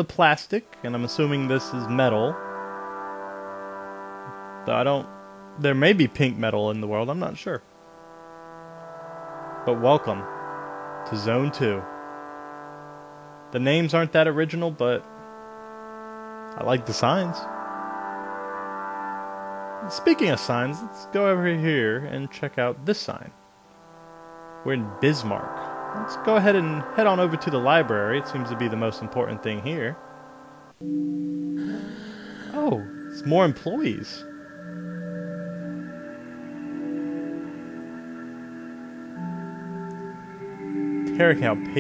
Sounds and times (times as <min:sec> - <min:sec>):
Speech: 0:00.0 - 0:02.4, 0:04.7 - 0:07.6, 0:09.7 - 0:10.3, 0:11.1 - 0:11.9, 0:13.6 - 0:15.0, 0:16.6 - 0:17.5, 0:19.8 - 0:23.4, 0:24.7 - 0:30.0, 0:31.6 - 0:34.2, 0:41.1 - 0:41.8.